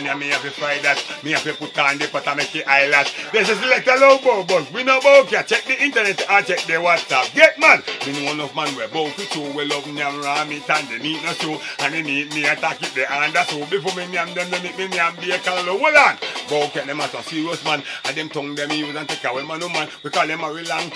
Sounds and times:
Music: 0.0s - 20.9s.

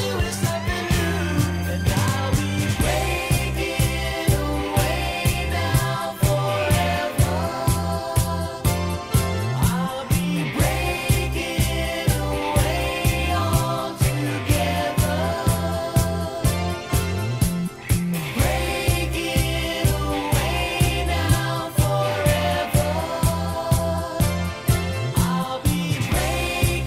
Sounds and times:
Independent music: 0.0s - 26.8s.

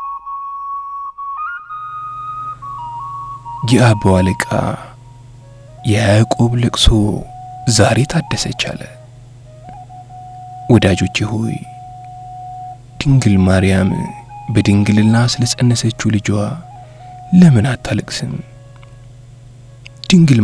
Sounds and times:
Music: 0.0s - 20.4s
Speech: 3.6s - 5.0s, 5.9s - 9.0s, 10.7s - 11.7s, 13.0s - 16.6s, 17.3s - 18.5s, 20.0s - 20.4s.

